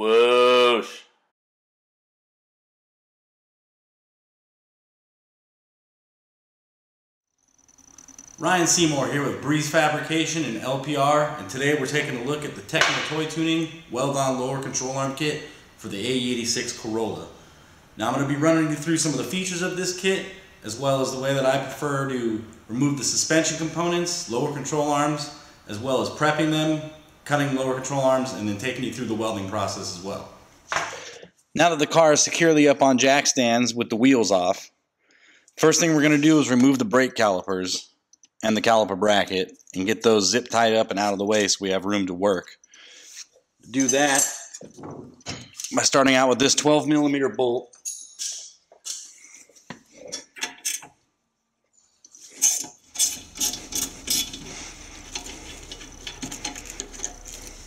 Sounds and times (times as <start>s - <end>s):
Speech: 0.0s - 1.1s, 8.4s - 17.3s, 18.0s - 30.4s, 31.6s - 34.7s, 35.6s - 42.6s, 43.7s - 44.4s, 45.7s - 47.7s.